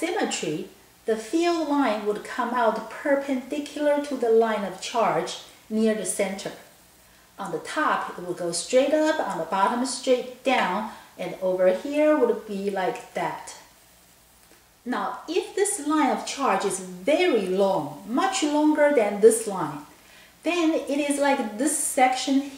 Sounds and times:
Speech: 0.0 - 6.7, 7.4 - 13.7, 14.9 - 22.5.

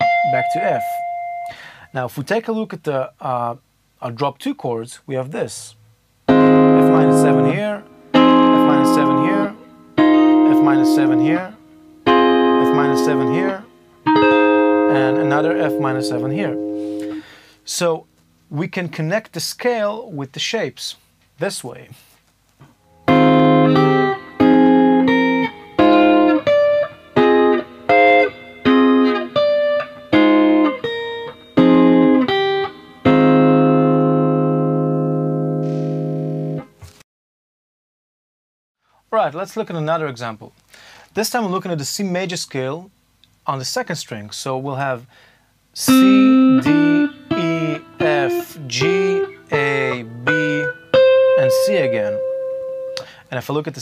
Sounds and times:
Electronic tuner: 0.0 - 1.8, 6.2 - 17.4, 22.6 - 37.0, 45.8 - 53.2
Guitar: 0.0 - 1.9, 6.3 - 18.4, 22.6 - 37.0, 45.8 - 53.8
Inside, small room: 0.0 - 37.0, 38.8 - 53.8
Speech: 0.2 - 1.0, 1.9 - 5.8, 6.8 - 7.8, 8.6 - 9.6, 10.5 - 11.6, 12.6 - 13.7, 14.9 - 16.6, 17.7 - 22.2, 39.1 - 40.6, 41.2 - 45.1, 45.8 - 46.2, 51.4 - 52.2, 53.3 - 53.8.

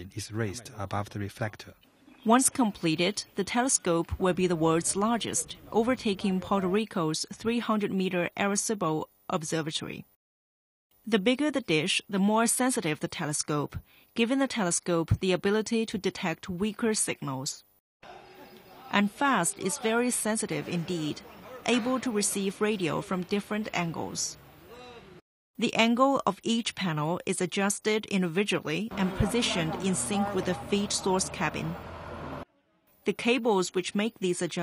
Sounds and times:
Speech: 0.0 - 10.0, 11.1 - 17.6, 18.7 - 24.4, 25.6 - 31.8, 33.1 - 34.6.

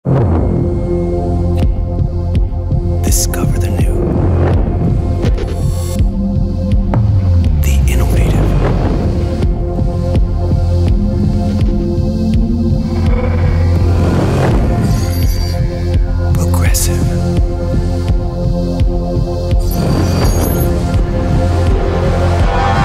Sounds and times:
Music: 0.0 - 22.8
Speech: 3.0 - 4.0, 7.6 - 8.6, 16.3 - 17.2.

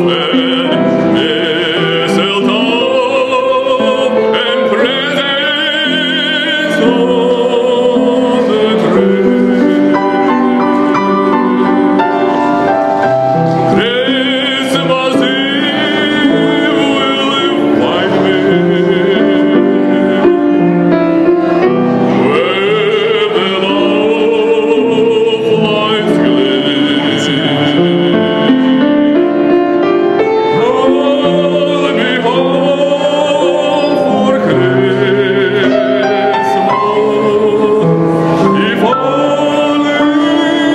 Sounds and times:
Male singing: 0.0 - 12.7, 13.7 - 40.7
Music: 0.0 - 40.7.

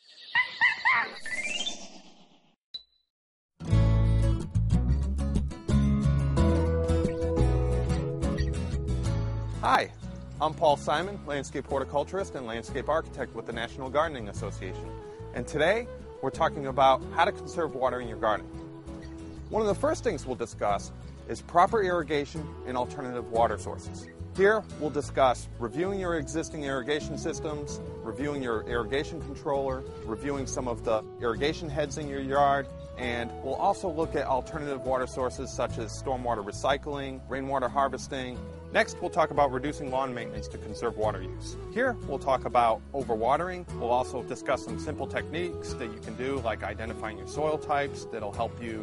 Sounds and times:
Music: 3.6 - 48.8
Speech: 9.6 - 18.5, 19.5 - 48.8.

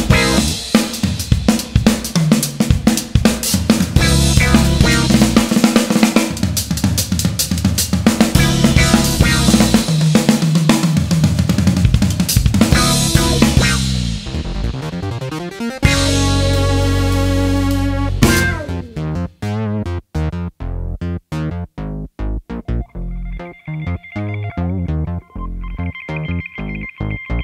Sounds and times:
Guitar: 0.0 - 0.8, 3.9 - 6.4, 8.3 - 10.0, 12.6 - 14.8, 15.8 - 19.2, 22.6 - 27.4
Snare drum: 0.0 - 14.0, 18.2 - 18.7
Drum kit: 0.0 - 19.4.

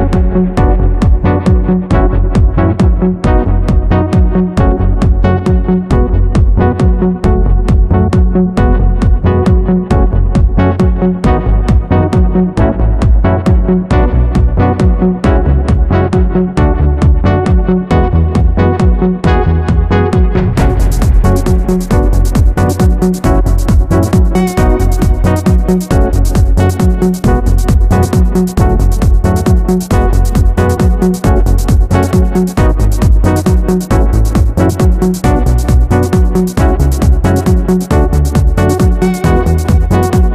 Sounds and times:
Trance music: 0.0 - 40.3.

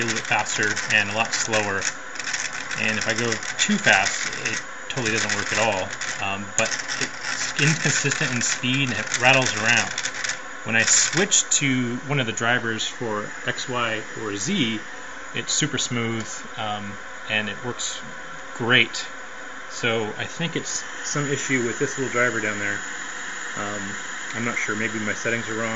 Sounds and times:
Speech: 0.0 - 1.9, 2.8 - 10.0, 10.7 - 22.9, 23.6 - 25.7
Rattle: 0.0 - 11.3.

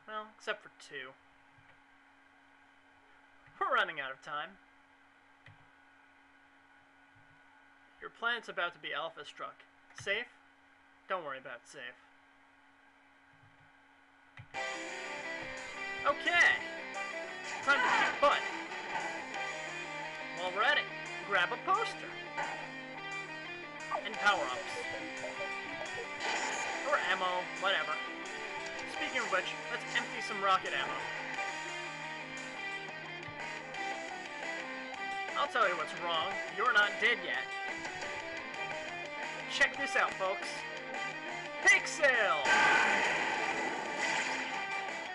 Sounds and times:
Speech: 0.0 - 1.2, 3.6 - 4.6, 8.0 - 10.3, 11.1 - 12.0, 16.0 - 16.6, 17.7 - 18.4, 20.4 - 22.2, 23.9 - 25.4, 26.9 - 28.0, 28.9 - 31.1, 35.4 - 37.5, 39.5 - 40.6, 41.6 - 42.4.

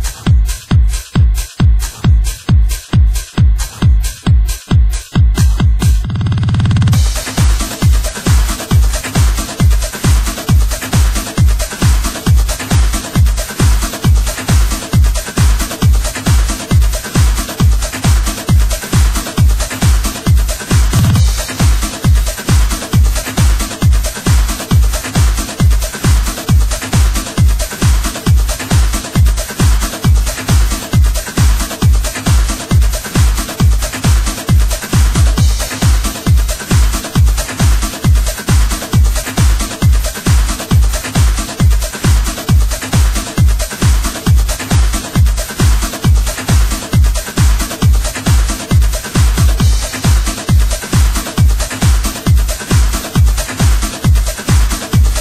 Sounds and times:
Electronic music: 0.0 - 55.2.

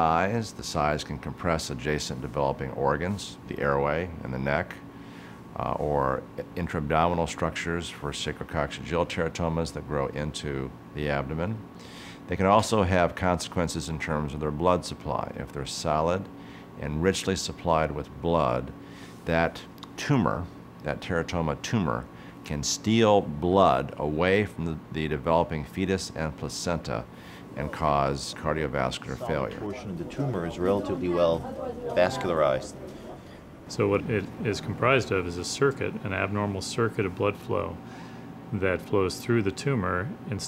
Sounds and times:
Speech: 0.0 - 4.8, 5.6 - 11.7, 12.3 - 37.8, 38.5 - 40.4.

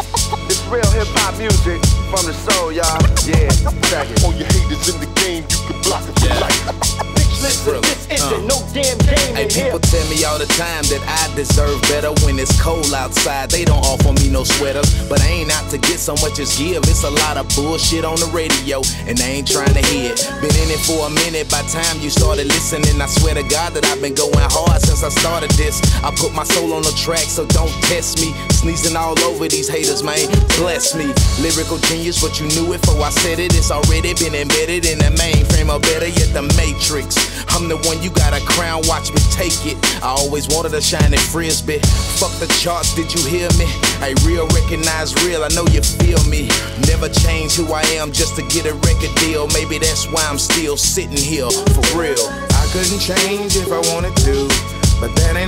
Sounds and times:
Exciting music: 0.0 - 17.4, 51.3 - 55.4.

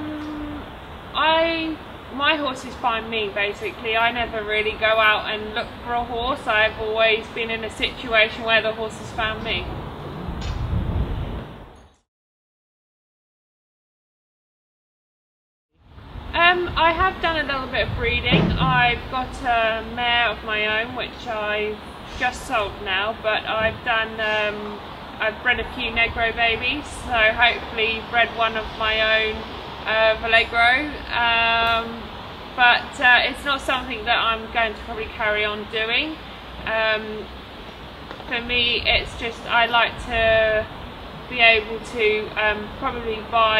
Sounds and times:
Outside, urban or manmade: 0.0 - 12.1, 15.7 - 43.5
Speech: 1.2 - 9.7, 16.4 - 37.3, 38.3 - 40.7, 41.3 - 43.5.

